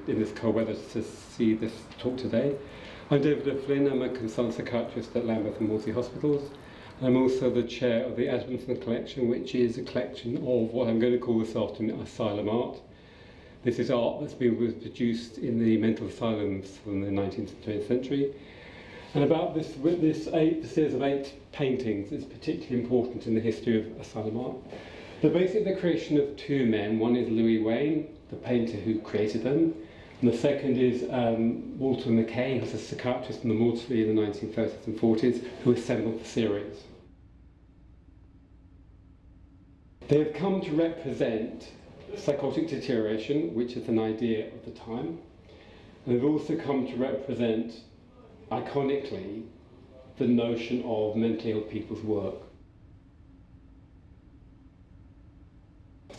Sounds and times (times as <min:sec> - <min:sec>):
Speech: 0:00.0 - 0:12.9, 0:13.6 - 0:18.4, 0:19.1 - 0:37.0, 0:40.0 - 0:45.3, 0:46.0 - 0:52.6.